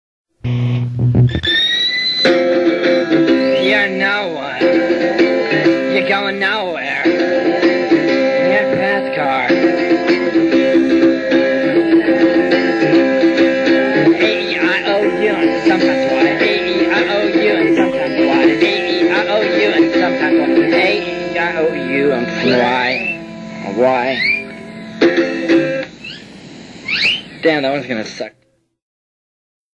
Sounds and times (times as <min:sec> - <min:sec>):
Music: 0:00.4 - 0:26.0
Speech: 0:22.1 - 0:24.3, 0:27.4 - 0:28.4.